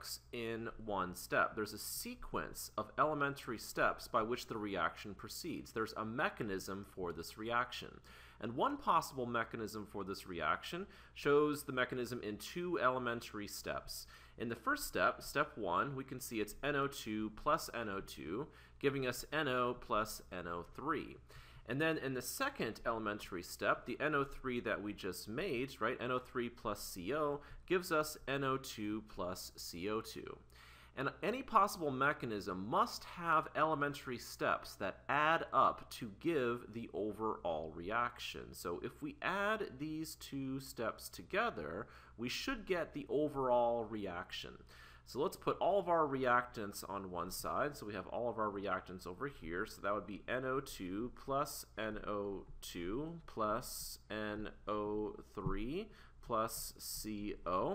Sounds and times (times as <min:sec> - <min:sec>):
Speech: 0:00.0 - 0:57.7.